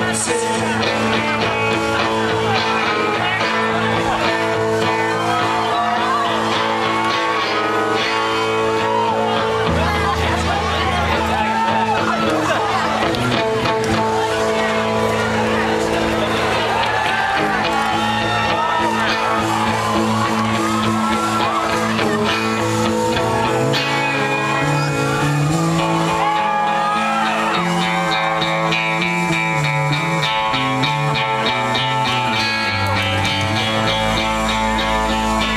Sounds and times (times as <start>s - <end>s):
Rhythm and blues: 0.0s - 35.5s.